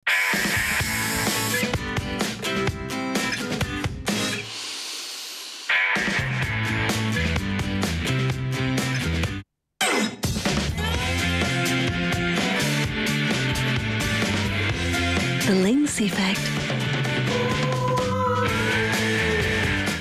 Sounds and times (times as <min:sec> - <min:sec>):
Music: 0:00.1 - 0:09.4, 0:10.1 - 0:20.0
Speech: 0:15.4 - 0:16.5.